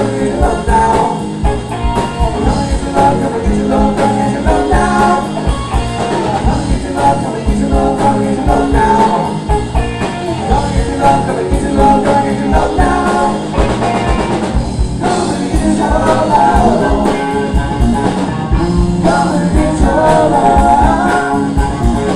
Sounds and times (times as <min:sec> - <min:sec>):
Singing: 0:00.0 - 0:01.3, 0:02.2 - 0:09.4, 0:10.4 - 0:13.8, 0:15.0 - 0:17.6, 0:19.0 - 0:22.1
Drum kit: 0:00.0 - 0:22.1
Rock music: 0:00.0 - 0:22.1.